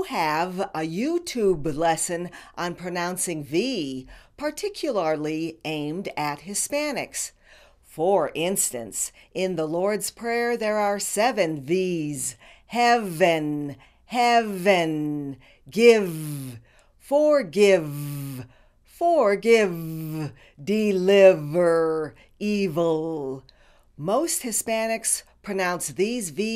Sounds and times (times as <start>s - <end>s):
Female speech, woman speaking: 0.0s - 7.3s, 8.0s - 18.4s, 19.0s - 23.4s, 24.0s - 26.5s.